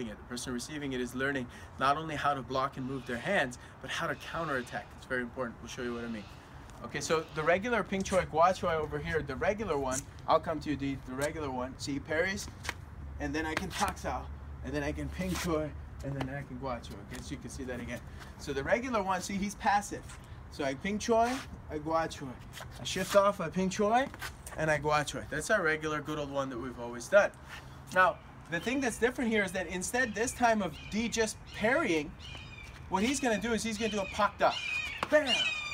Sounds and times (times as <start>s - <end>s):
Speech: 0.0s - 12.5s, 13.2s - 32.1s, 32.9s - 35.5s.